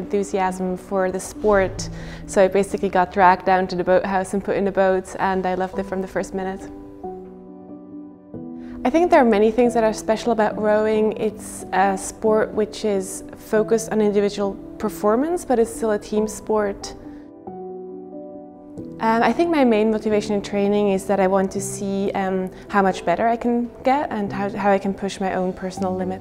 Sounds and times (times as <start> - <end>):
Speech: 0.0 - 6.7, 8.9 - 17.0, 19.0 - 26.2
Music: 0.0 - 26.2.